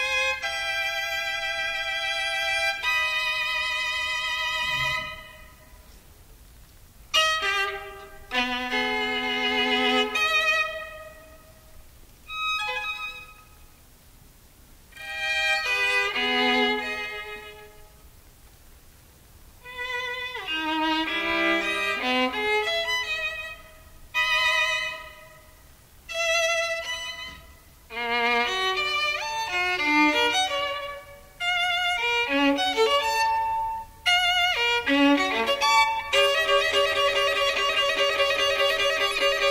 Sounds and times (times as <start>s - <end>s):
Violin, fiddle: 0.0s - 5.8s, 7.1s - 11.6s, 12.2s - 13.7s, 15.0s - 17.9s, 19.6s - 39.5s.